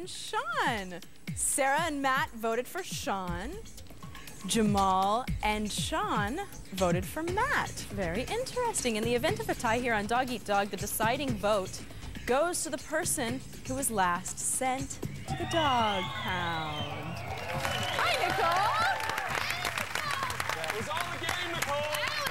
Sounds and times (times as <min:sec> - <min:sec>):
Music: 0:00.0 - 0:22.3.